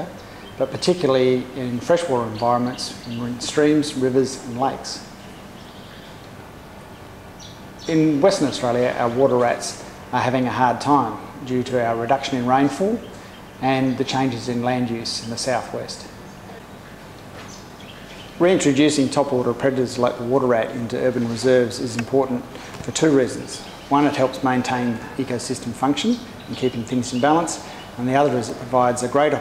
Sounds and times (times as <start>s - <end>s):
Speech: 0.0s - 5.1s, 7.9s - 16.2s, 18.4s - 29.4s.